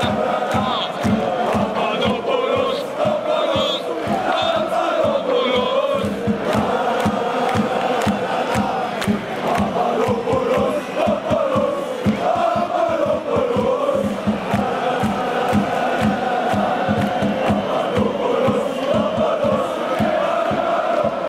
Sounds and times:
Music: 0.0s - 21.2s.

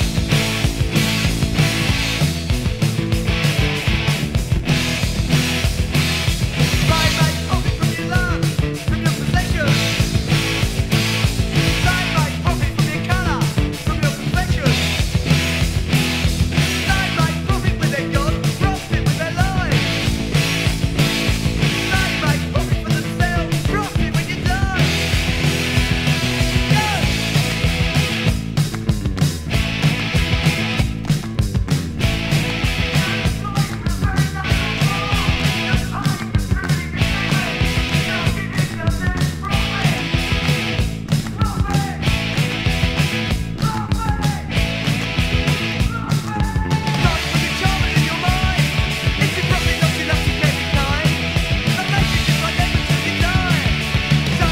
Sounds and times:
Psychedelic rock: 0.0s - 54.5s
Punk rock: 0.0s - 54.5s.

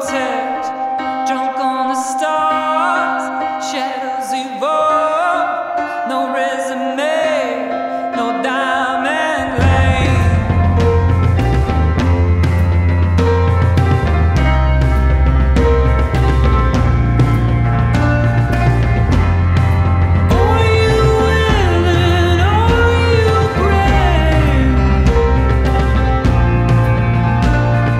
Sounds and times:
Music: 0.0s - 27.9s.

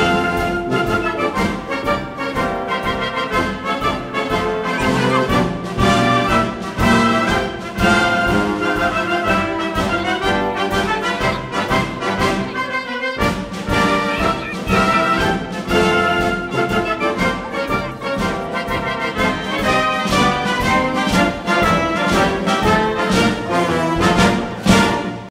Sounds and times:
Music: 0.0s - 25.3s.

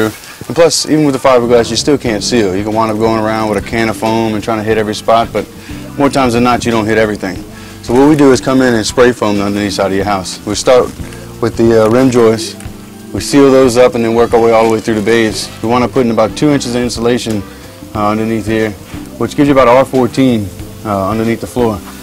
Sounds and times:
Spray: 0.0s - 3.0s, 5.1s - 22.0s
Speech: 0.0s - 21.9s
Music: 0.0s - 22.0s.

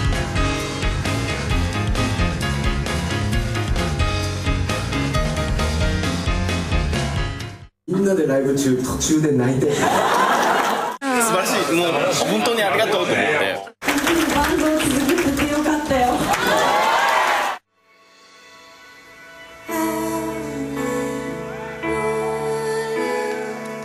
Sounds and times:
Speech: 7.9s - 9.7s.

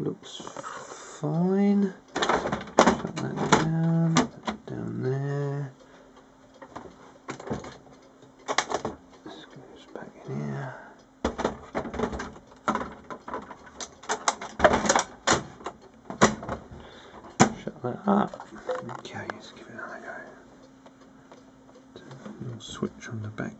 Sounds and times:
Speech: 0.0s - 2.0s, 2.9s - 5.8s, 9.3s - 10.9s, 17.5s - 20.4s, 22.3s - 23.5s.

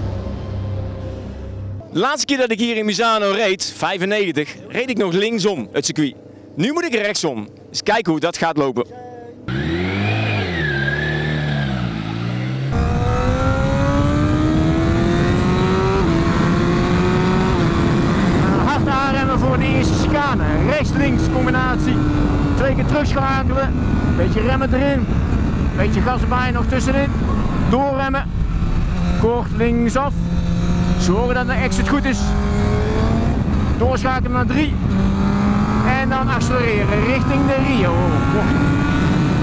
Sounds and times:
Vehicle: 0.0s - 1.9s, 8.9s - 39.4s
Speech: 1.9s - 9.4s, 18.5s - 22.0s, 22.6s - 25.0s, 25.8s - 27.1s, 27.7s - 28.3s, 29.2s - 30.2s, 31.0s - 32.4s, 33.8s - 34.8s, 35.8s - 38.6s.

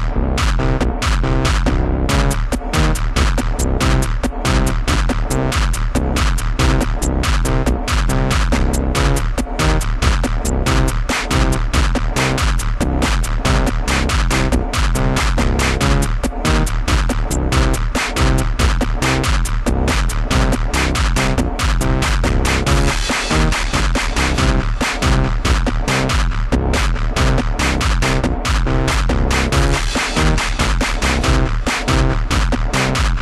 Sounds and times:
Electronic dance music: 0.0s - 33.2s.

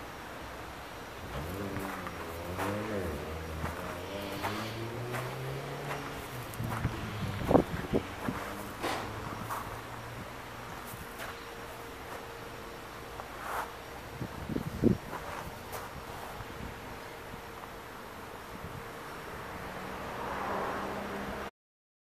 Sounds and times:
Car passing by: 1.2s - 11.5s, 18.6s - 21.5s.

